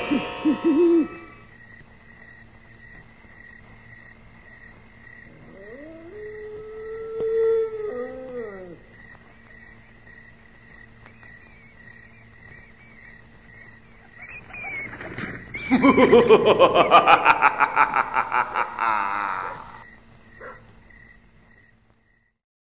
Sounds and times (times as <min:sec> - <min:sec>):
Yip: 0:20.4 - 0:20.6
Bow-wow: 0:20.4 - 0:20.7.